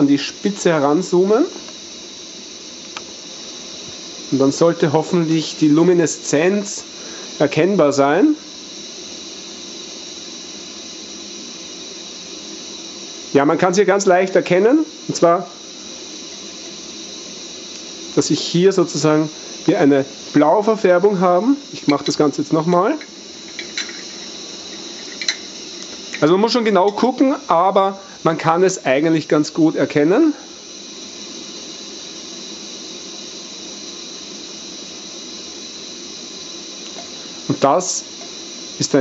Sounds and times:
Speech: 0.0 - 1.6, 4.3 - 8.4, 13.4 - 15.6, 18.2 - 23.0, 26.2 - 30.4, 37.5 - 38.1, 38.8 - 39.0.

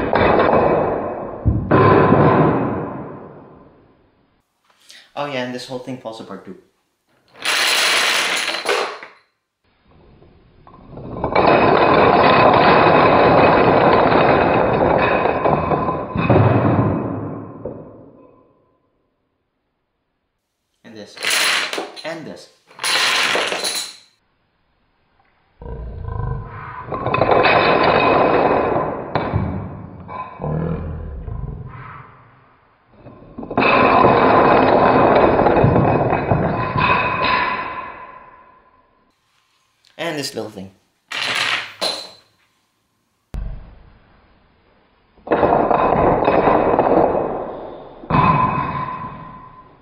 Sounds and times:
Speech: 5.1 - 6.7, 20.8 - 21.2, 22.0 - 22.6, 39.9 - 40.8.

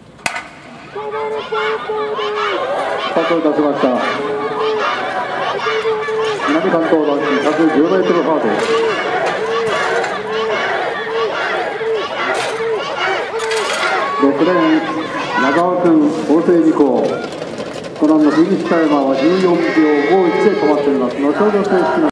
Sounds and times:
Outside, urban or manmade: 0.0 - 22.1
Speech: 18.0 - 22.1.

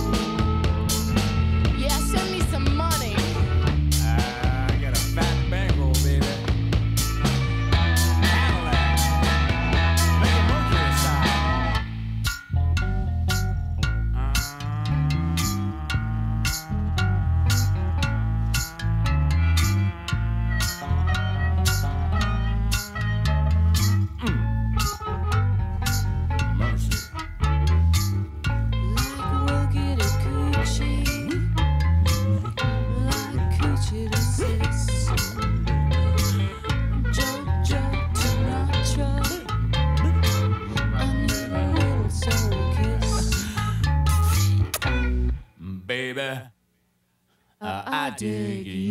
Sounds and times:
Music: 0.0 - 45.6
Singing: 8.2 - 11.8, 28.9 - 31.5, 32.6 - 39.6, 40.7 - 43.7, 47.6 - 48.9.

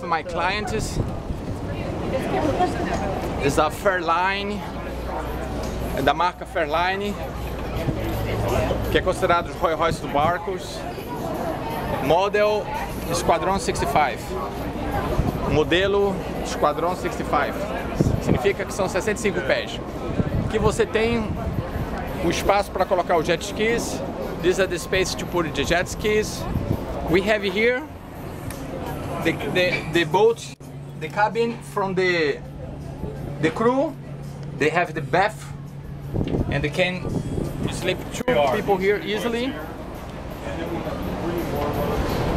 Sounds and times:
Boat, Water vehicle: 0.0 - 42.3.

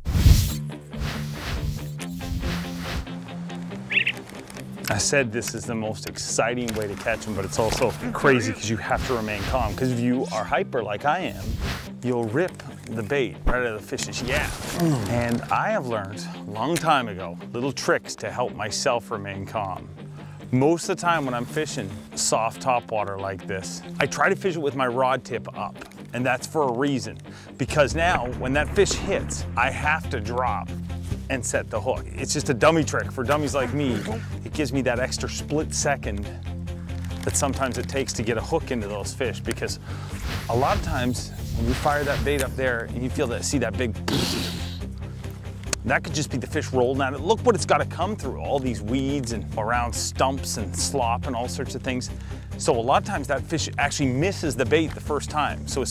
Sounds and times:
Music: 0.0 - 55.9
Speech: 4.9 - 11.4, 12.0 - 19.8, 20.5 - 30.7, 31.3 - 36.4, 37.2 - 39.8, 40.5 - 44.0, 45.8 - 55.9.

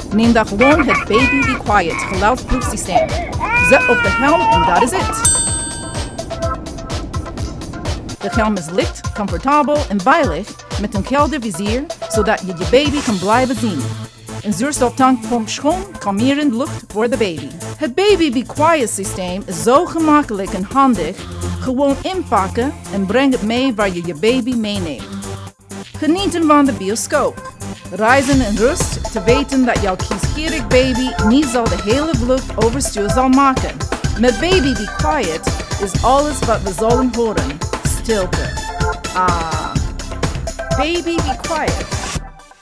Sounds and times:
Music: 0.0 - 42.6
Speech: 0.1 - 5.3, 8.2 - 25.1, 26.0 - 38.5, 39.2 - 39.8, 40.8 - 41.8
Baby cry, infant cry: 0.6 - 5.3.

